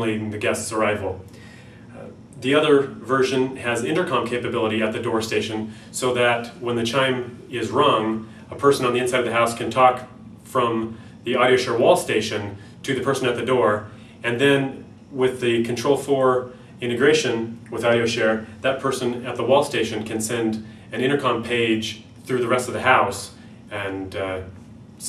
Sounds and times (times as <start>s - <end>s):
Speech: 0.0s - 1.2s, 1.9s - 25.0s.